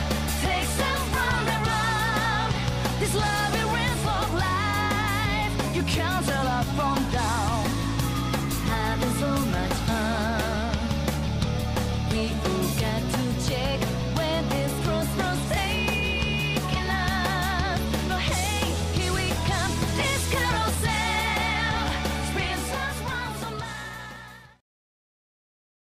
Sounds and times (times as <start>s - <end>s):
Music: 0.0s - 24.6s.